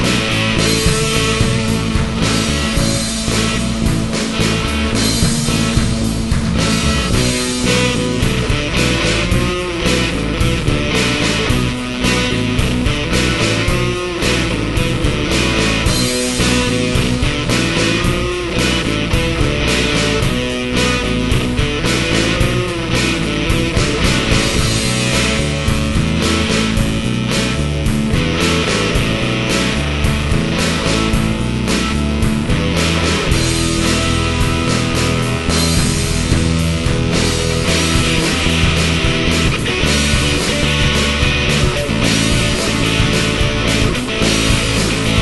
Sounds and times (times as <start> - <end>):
Heavy metal: 0.0 - 45.2
Progressive rock: 0.0 - 45.2
Psychedelic rock: 0.0 - 45.2.